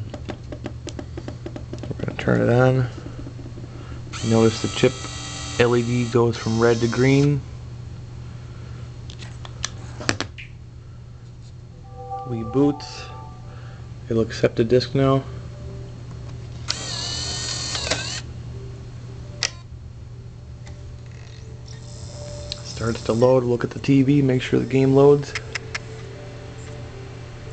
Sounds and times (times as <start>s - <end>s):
Speech: 12.3s - 13.2s, 22.7s - 25.4s.